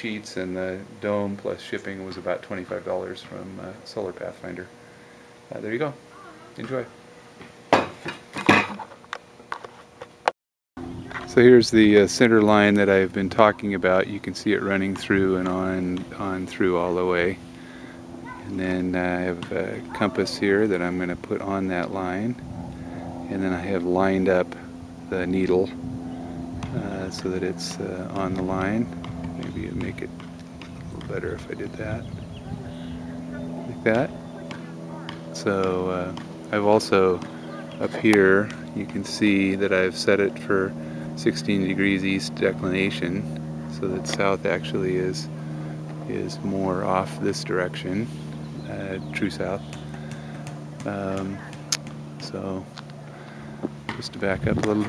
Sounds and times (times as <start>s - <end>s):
Speech: 5.5s - 6.9s, 11.2s - 17.4s, 18.4s - 22.4s, 26.7s - 30.1s, 30.9s - 45.3s, 46.0s - 49.7s, 50.8s - 52.7s, 53.9s - 54.8s.